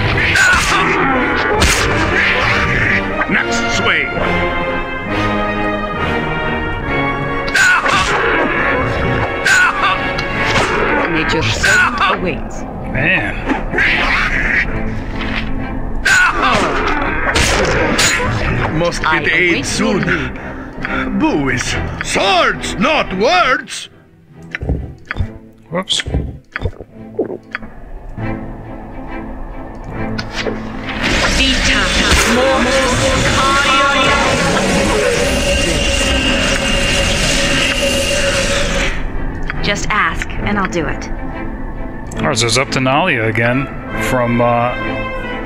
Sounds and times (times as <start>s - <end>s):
Music: 0.0s - 45.4s
Speech: 18.7s - 20.3s, 42.2s - 44.8s.